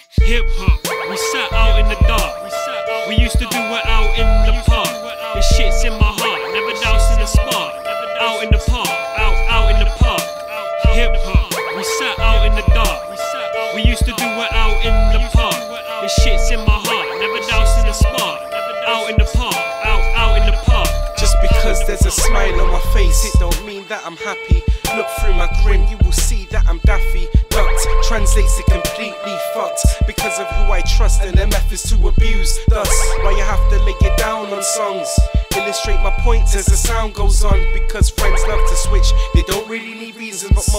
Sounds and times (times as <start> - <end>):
Music: 0.0 - 40.7.